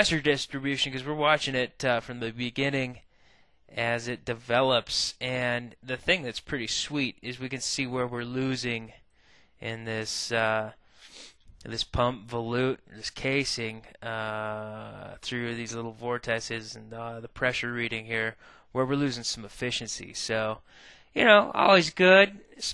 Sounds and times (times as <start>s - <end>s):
Speech: 0.0s - 3.0s, 3.7s - 9.0s, 9.6s - 10.8s, 11.6s - 20.6s, 21.2s - 22.7s.